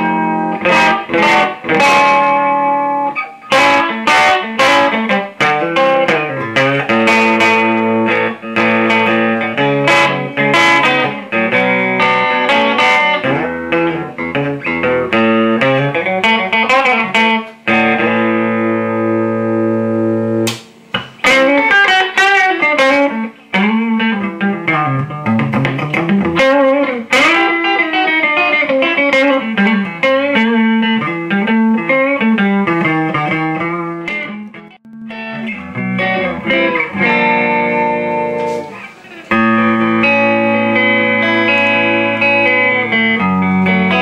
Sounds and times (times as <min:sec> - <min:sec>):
Acoustic guitar: 0:00.0 - 0:20.4, 0:21.0 - 0:44.0.